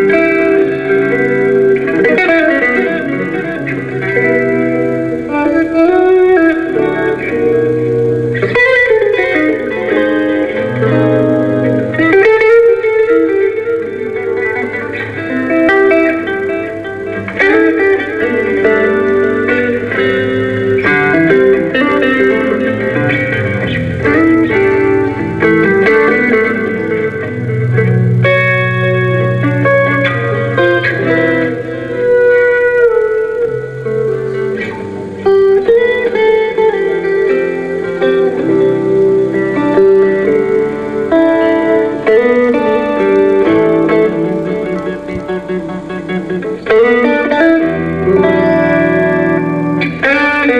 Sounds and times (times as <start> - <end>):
Acoustic guitar: 0.0 - 50.5
Electric guitar: 0.0 - 50.5
Strum: 0.0 - 50.5.